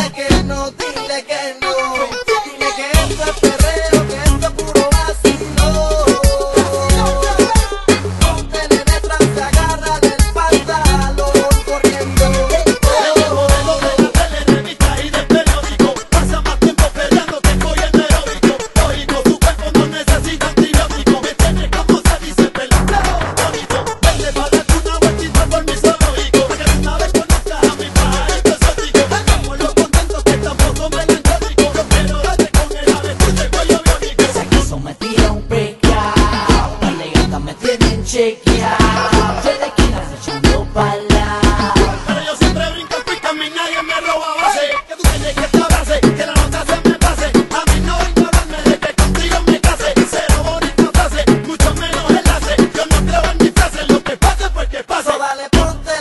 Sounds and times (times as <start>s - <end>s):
Music: 0.0s - 56.0s.